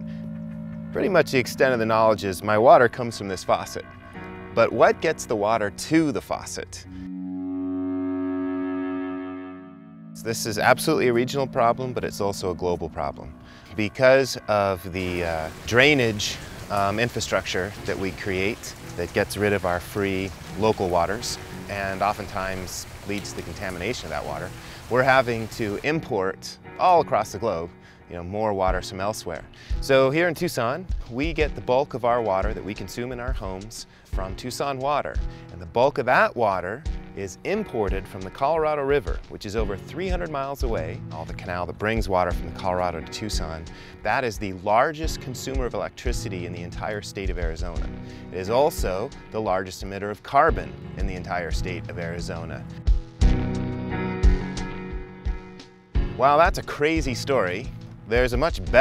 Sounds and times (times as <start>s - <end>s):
Music: 0.0s - 58.8s
Speech: 1.0s - 3.9s, 4.6s - 6.9s, 10.2s - 52.7s, 56.2s - 58.8s
Stream: 15.0s - 26.1s.